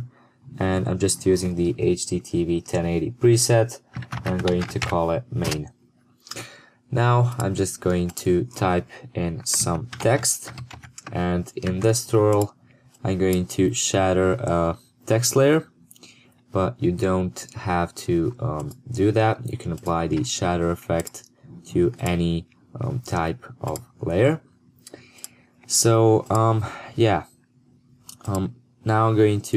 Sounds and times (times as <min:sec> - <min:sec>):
Speech: 0:00.0 - 0:05.7, 0:06.4 - 0:15.7, 0:16.6 - 0:24.4, 0:25.7 - 0:27.3, 0:28.1 - 0:29.5.